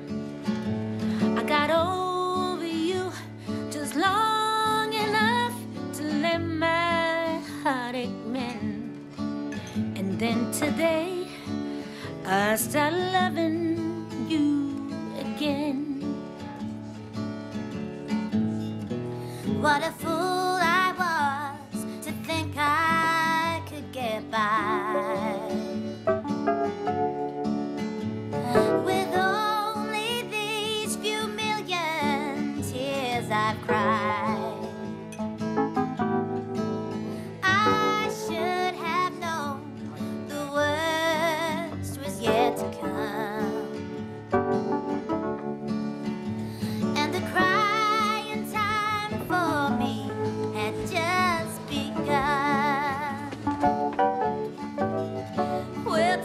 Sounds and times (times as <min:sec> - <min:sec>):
Music: 0:00.0 - 0:56.2.